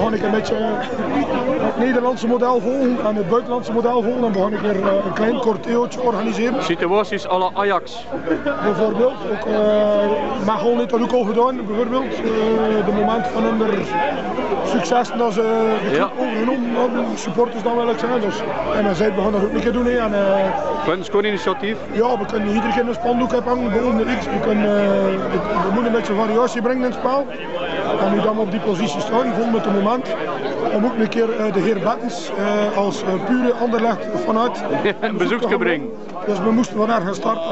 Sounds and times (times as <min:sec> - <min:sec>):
Speech: 0:00.0 - 0:37.5.